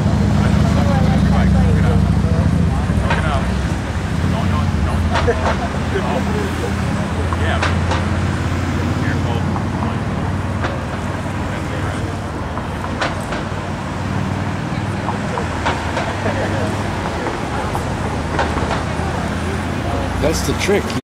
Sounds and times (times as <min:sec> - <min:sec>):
Speech: 0:00.1 - 0:07.9, 0:08.6 - 0:13.2, 0:18.8 - 0:21.0.